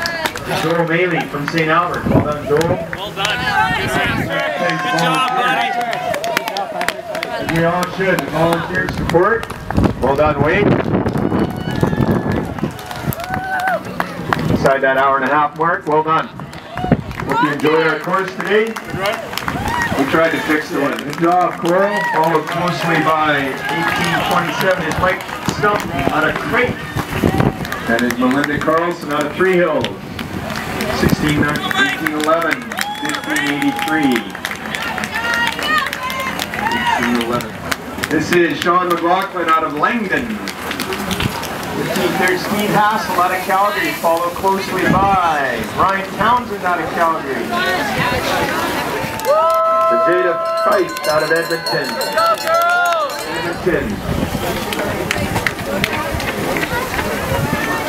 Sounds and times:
Outside, urban or manmade: 0.0 - 57.8
Run: 0.0 - 57.8.

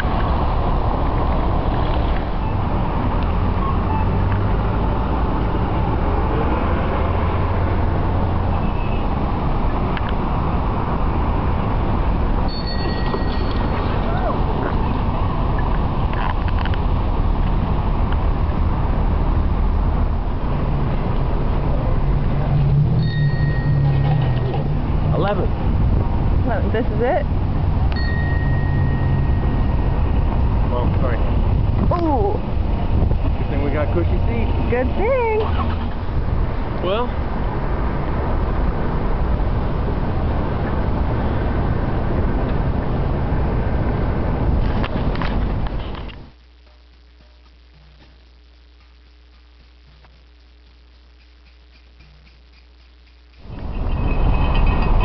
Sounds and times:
Vehicle: 0.0 - 55.0.

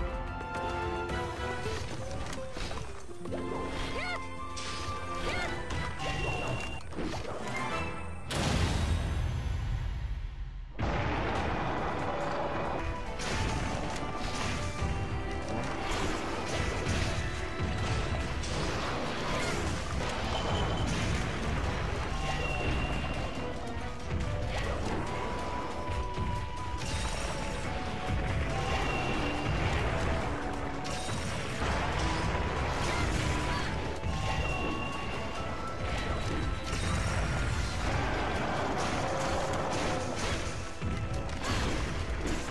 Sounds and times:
Music: 0.0 - 42.5.

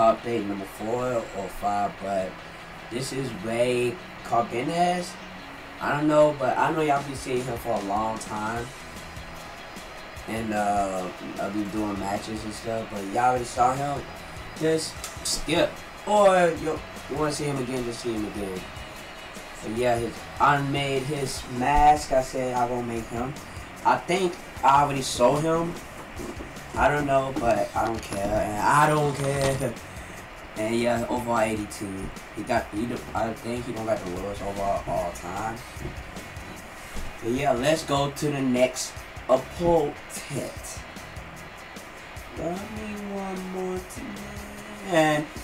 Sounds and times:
Speech: 0.0 - 5.2, 5.8 - 8.7, 10.3 - 18.7, 19.6 - 25.8, 26.8 - 29.8, 30.6 - 35.7, 37.2 - 40.8, 42.3 - 45.4
Music: 0.0 - 45.4.

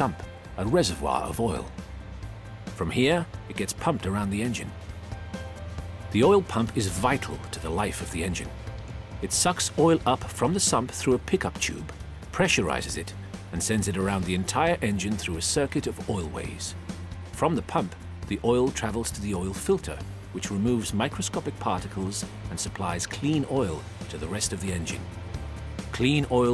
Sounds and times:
Speech: 0.0 - 1.7, 2.8 - 4.7, 6.1 - 8.5, 9.2 - 16.8, 17.4 - 25.0, 25.9 - 26.5
Music: 0.0 - 26.5.

